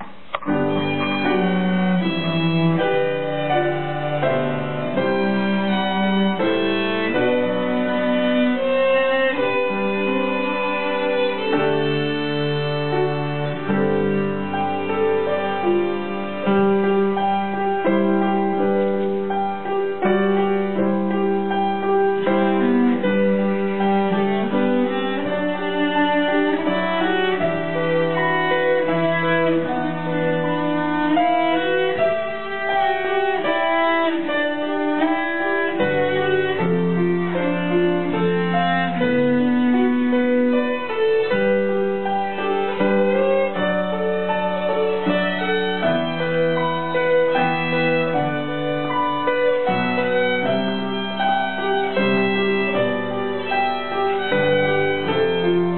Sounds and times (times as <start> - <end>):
Cello: 0.0 - 55.7
Violin, fiddle: 0.0 - 55.7.